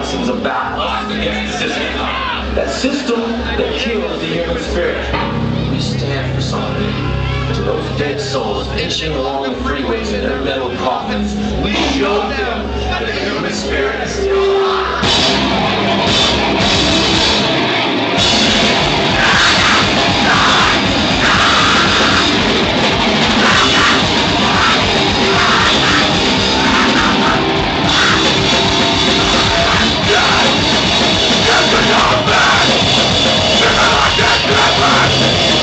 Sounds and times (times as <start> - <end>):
Speech: 0.0 - 15.0
Music: 0.0 - 35.6.